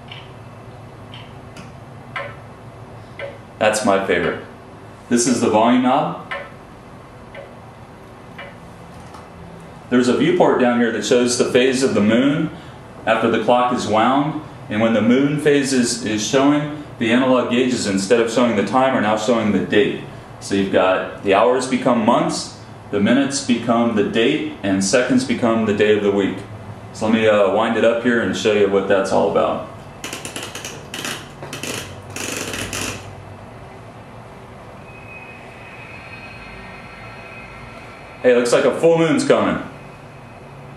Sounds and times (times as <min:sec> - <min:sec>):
Speech: 0:03.6 - 0:04.5, 0:05.1 - 0:06.3, 0:09.9 - 0:29.8, 0:38.2 - 0:39.7.